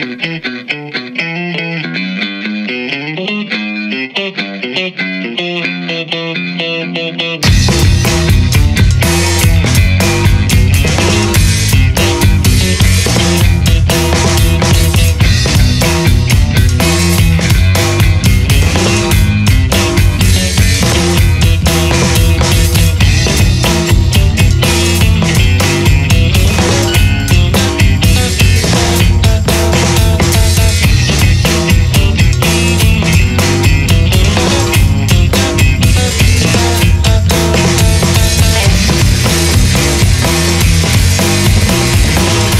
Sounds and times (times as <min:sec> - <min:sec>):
Music: 0:00.0 - 0:42.6.